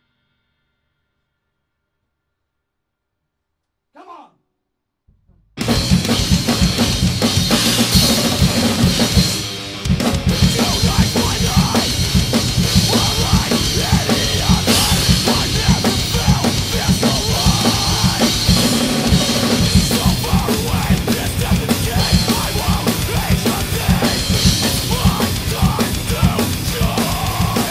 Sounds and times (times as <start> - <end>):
Bass drum: 5.1 - 27.7
Drum kit: 5.2 - 27.7.